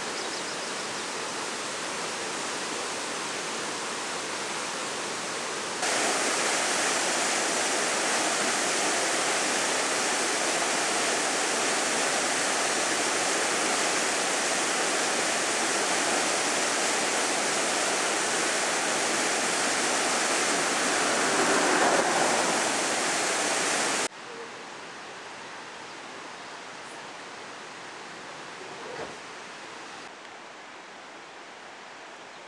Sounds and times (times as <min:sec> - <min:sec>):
Waterfall: 0:00.0 - 0:32.4.